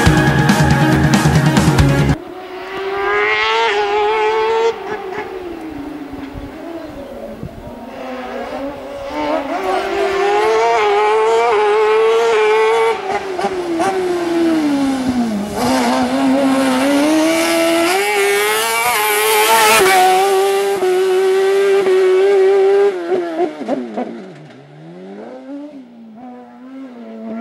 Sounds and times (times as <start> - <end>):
Car: 2.1 - 27.4.